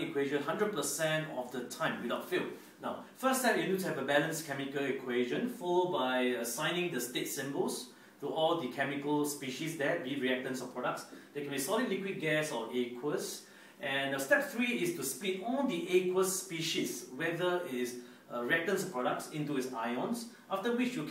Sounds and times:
Speech: 0:00.0 - 0:21.1.

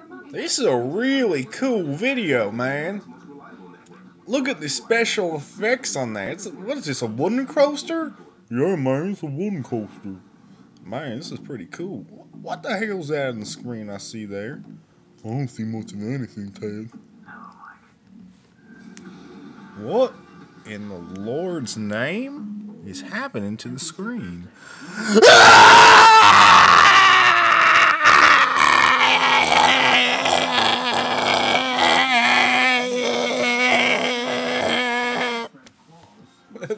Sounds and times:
Speech: 0:00.0 - 0:10.2.

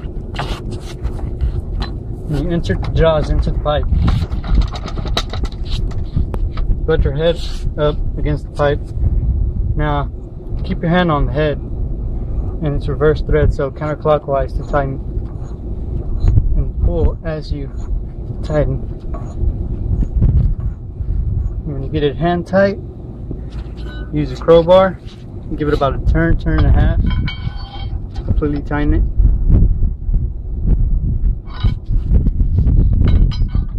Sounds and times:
Speech: 0:02.3 - 0:03.9, 0:06.9 - 0:08.8, 0:09.8 - 0:11.6, 0:12.6 - 0:15.0, 0:16.6 - 0:17.8, 0:18.4 - 0:18.8, 0:21.6 - 0:22.8, 0:24.1 - 0:27.1, 0:28.2 - 0:29.1.

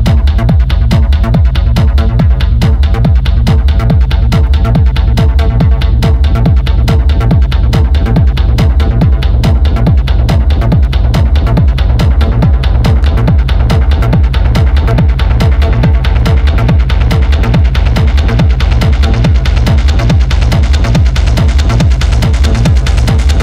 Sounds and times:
Music: 0:00.0 - 0:23.4.

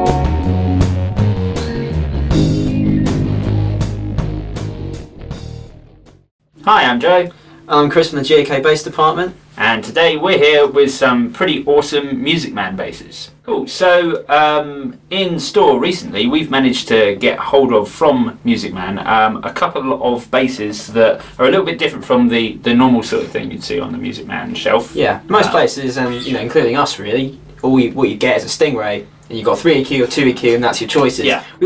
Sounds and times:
Speech: 0:06.6 - 0:31.6.

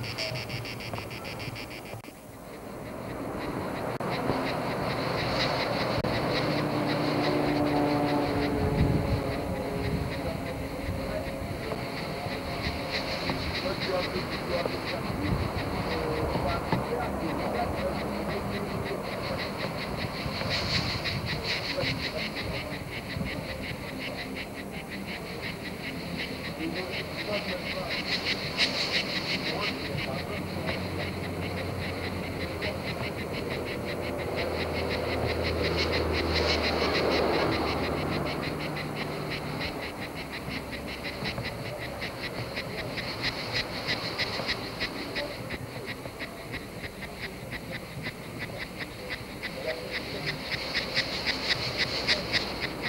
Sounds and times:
Animal: 0:00.0 - 0:52.8.

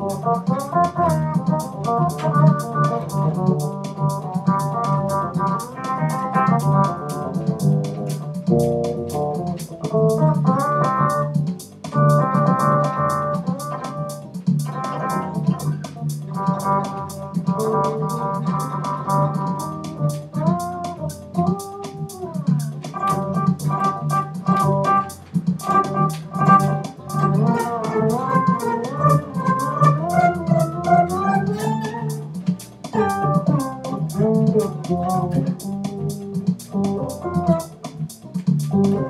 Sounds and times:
Bass guitar: 0:00.0 - 0:39.0.

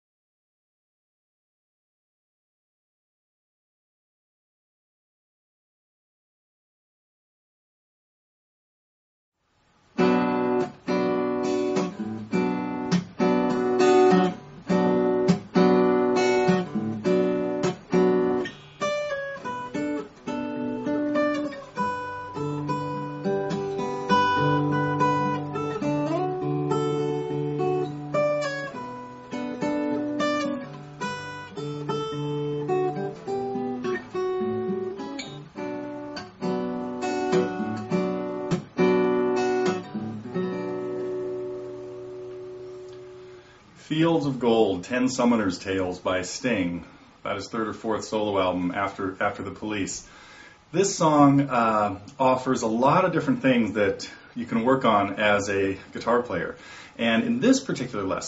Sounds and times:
Acoustic guitar: 0:09.8 - 0:58.2.

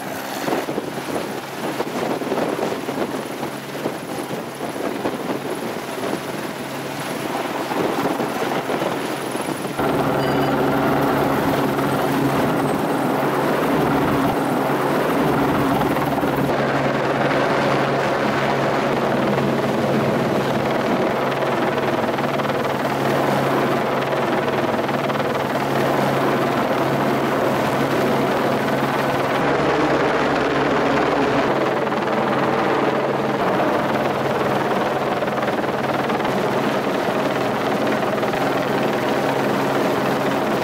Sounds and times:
Helicopter: 0:00.0 - 0:40.6.

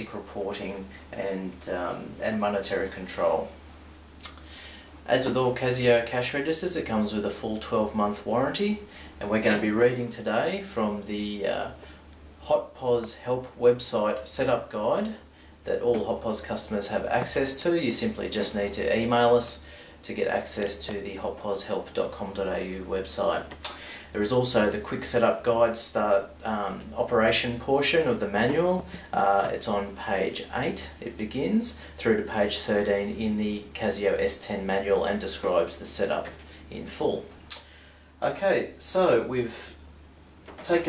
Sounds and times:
Speech: 0:00.0 - 0:03.6, 0:05.0 - 0:11.8, 0:12.4 - 0:37.4, 0:38.2 - 0:39.9, 0:40.6 - 0:40.8.

